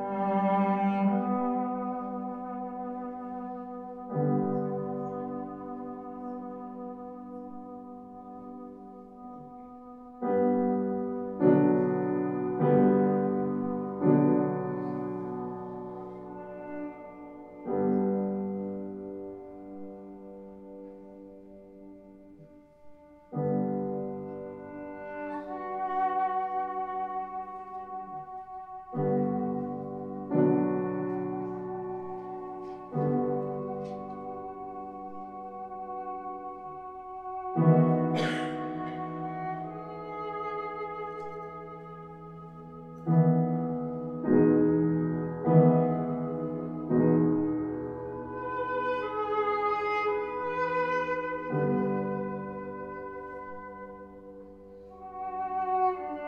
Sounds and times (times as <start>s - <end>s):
Piano: 0.0s - 56.2s.